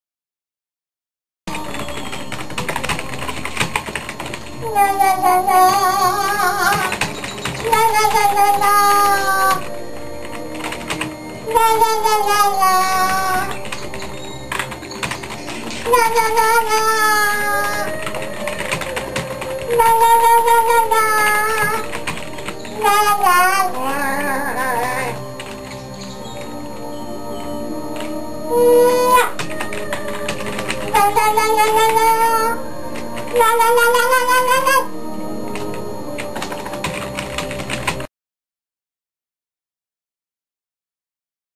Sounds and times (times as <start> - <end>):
Music: 1.5 - 38.1
Child singing: 4.6 - 7.0, 7.6 - 9.8, 11.4 - 13.6, 15.9 - 21.9, 22.7 - 25.2, 28.5 - 32.6, 33.3 - 34.9.